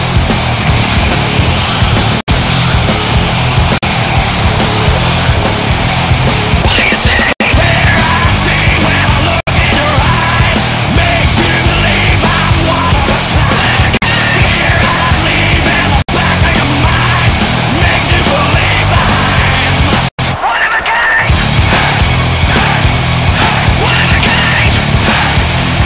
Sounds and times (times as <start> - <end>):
Music: 0.0 - 20.4, 21.3 - 25.8.